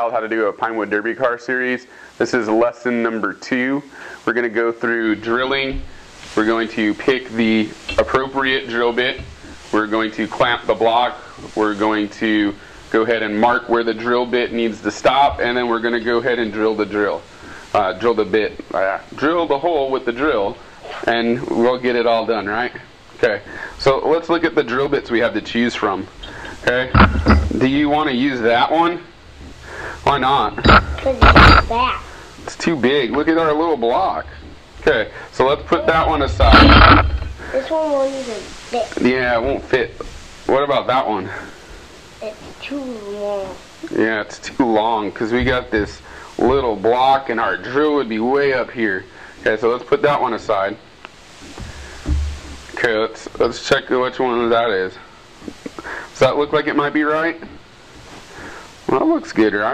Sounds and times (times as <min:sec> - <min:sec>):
Speech: 0:00.0 - 0:29.1, 0:30.0 - 0:41.5, 0:42.2 - 0:50.8, 0:52.8 - 0:55.1, 0:56.2 - 0:57.6, 0:58.9 - 0:59.7.